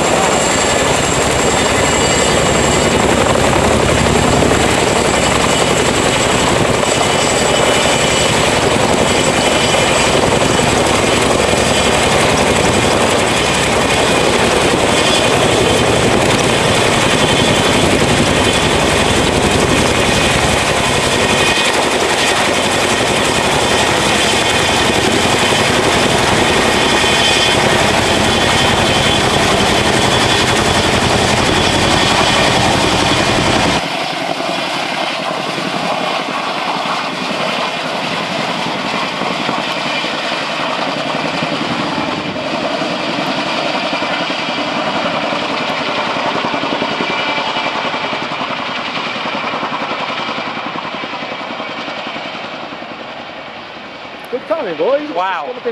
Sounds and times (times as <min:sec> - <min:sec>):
Helicopter: 0:00.0 - 0:55.7
Outside, rural or natural: 0:00.0 - 0:55.7.